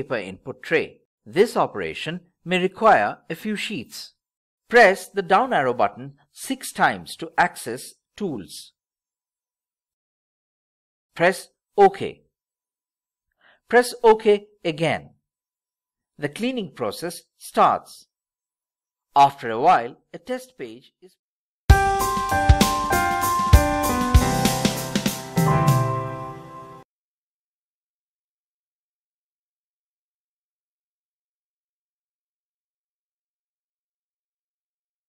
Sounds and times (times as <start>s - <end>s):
Speech: 0.0s - 8.8s, 11.2s - 12.3s, 13.7s - 15.2s, 16.2s - 18.1s, 19.2s - 21.2s
Music: 21.7s - 26.8s.